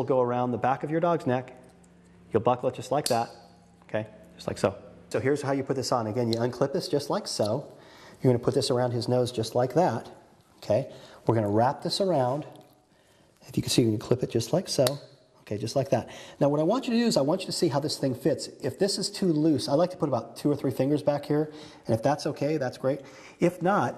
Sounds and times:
Speech: 0.0 - 1.6, 2.3 - 3.3, 3.9 - 12.6, 13.4 - 23.9.

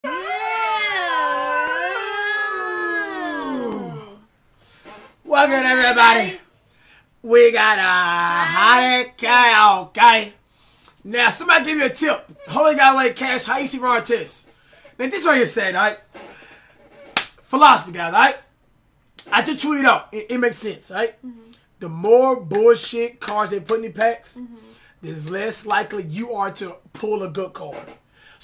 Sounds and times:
Inside, small room: 0.0 - 28.4
Speech: 5.3 - 6.4, 7.2 - 10.4, 11.1 - 16.0, 17.5 - 18.5, 19.2 - 27.9.

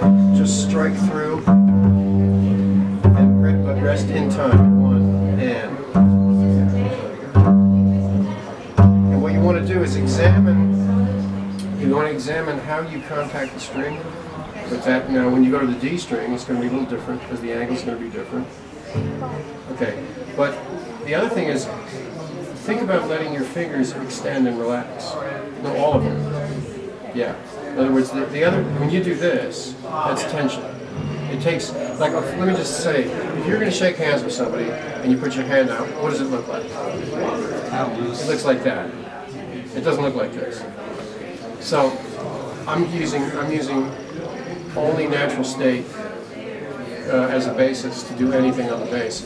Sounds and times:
Pizzicato: 0.0 - 14.9, 18.8 - 20.1, 25.7 - 33.8
Speech: 0.0 - 49.2.

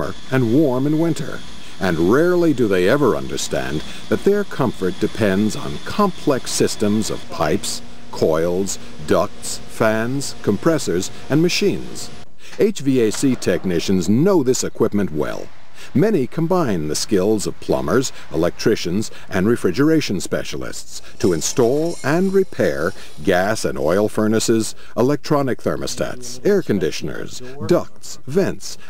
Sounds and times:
Air conditioning: 0.0 - 12.5, 15.2 - 25.0
Speech: 0.0 - 28.8.

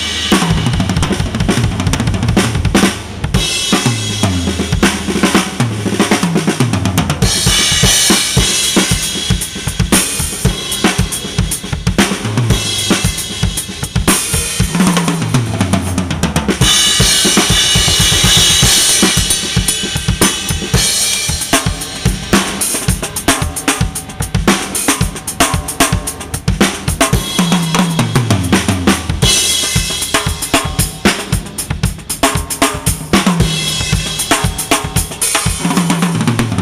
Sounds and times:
Bass drum: 0.0 - 36.6
Drum kit: 0.0 - 36.6.

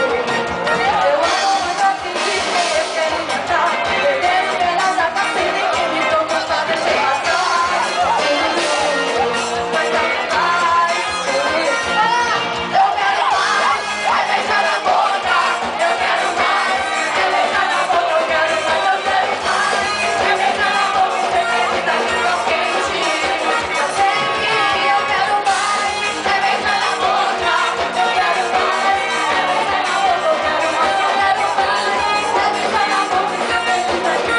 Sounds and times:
Music: 0.0 - 34.3.

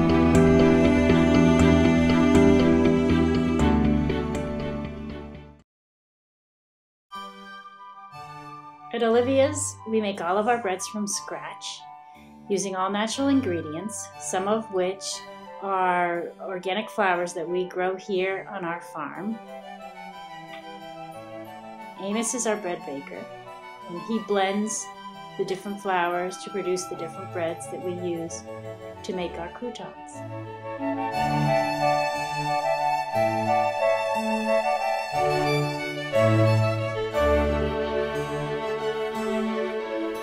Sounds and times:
Music: 0.0 - 5.6, 7.1 - 40.2
Speech: 8.9 - 11.8, 12.5 - 19.4, 22.0 - 23.3, 23.9 - 28.4, 29.0 - 30.2.

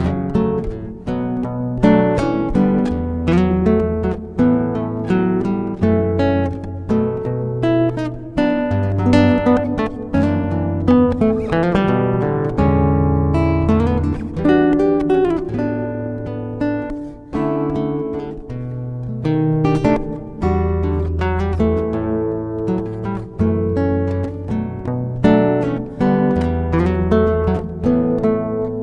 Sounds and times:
Acoustic guitar: 0.0 - 28.8
Strum: 0.0 - 28.8.

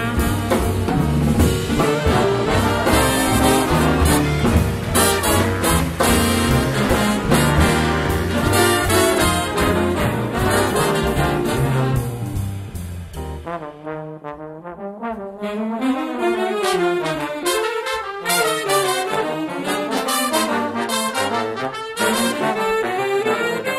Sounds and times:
Trombone: 0.0 - 23.7
Trumpet: 0.0 - 23.7
Saxophone: 1.6 - 12.5, 15.3 - 23.7.

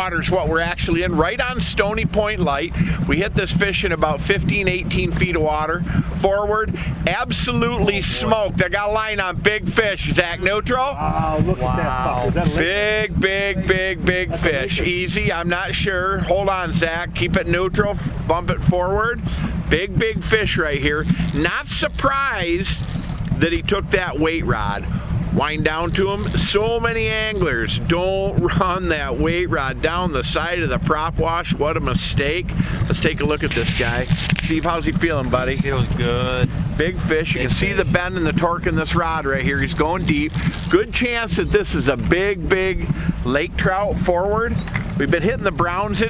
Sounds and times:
Speech: 0.0 - 22.8, 23.4 - 46.0.

